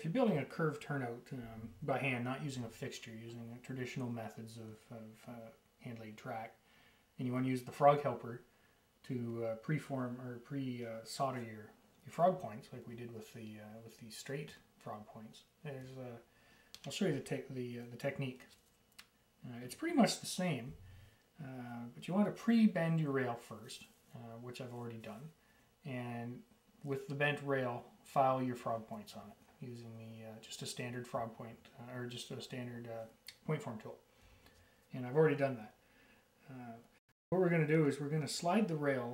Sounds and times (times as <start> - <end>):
Speech: 0.0 - 6.6, 7.2 - 20.8, 21.4 - 34.0, 34.9 - 35.8, 36.4 - 39.1.